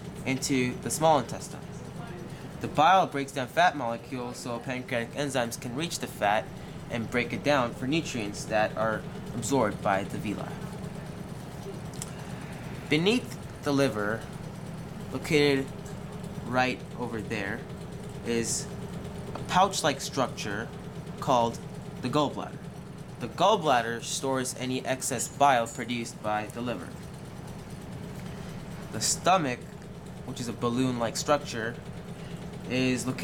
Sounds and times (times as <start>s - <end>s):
Speech: 0.2s - 10.6s, 12.9s - 14.2s, 15.1s - 15.7s, 16.4s - 18.7s, 19.4s - 22.6s, 23.2s - 27.0s, 28.9s - 29.7s, 30.3s - 31.8s, 32.7s - 33.2s.